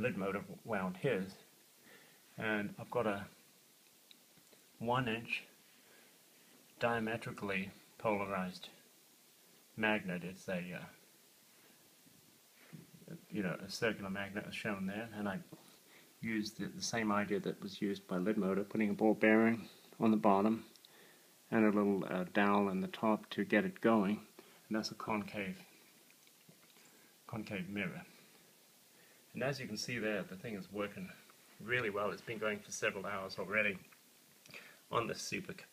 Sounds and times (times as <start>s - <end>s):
Speech: 0.0s - 1.5s, 2.4s - 3.4s, 4.8s - 5.6s, 6.8s - 8.8s, 9.8s - 11.0s, 13.0s - 15.6s, 16.2s - 20.7s, 21.5s - 25.8s, 27.3s - 28.2s, 29.3s - 33.9s, 34.9s - 35.7s
Inside, small room: 0.0s - 35.7s.